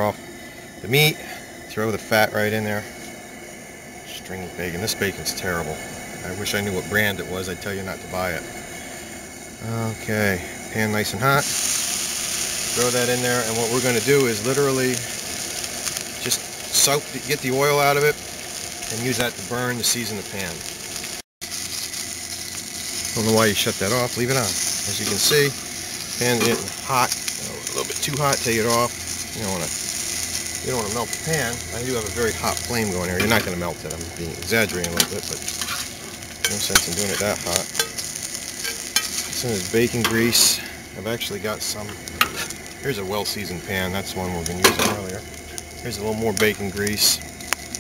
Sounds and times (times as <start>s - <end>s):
Frying (food): 0.0s - 47.8s
Sizzle: 0.0s - 47.8s.